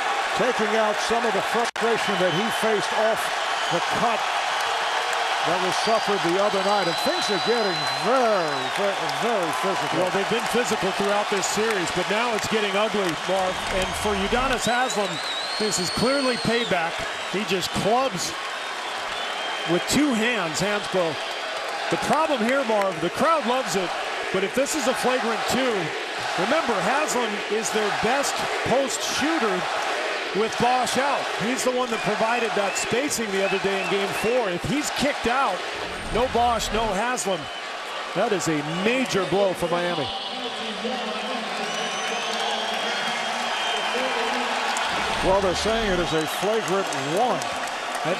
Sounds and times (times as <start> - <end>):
Speech: 0.4 - 4.2, 5.4 - 18.4, 19.7 - 21.2, 21.9 - 29.7, 30.3 - 37.5, 38.2 - 43.0, 43.9 - 48.2.